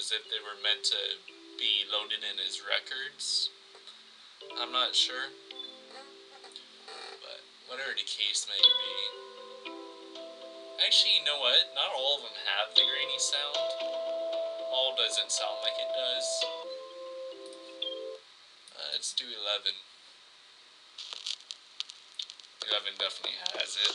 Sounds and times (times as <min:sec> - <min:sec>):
Glockenspiel: 0:00.0 - 0:02.9, 0:04.4 - 0:06.3, 0:08.6 - 0:18.2
Marimba, xylophone: 0:04.4 - 0:05.9, 0:08.6 - 0:18.2.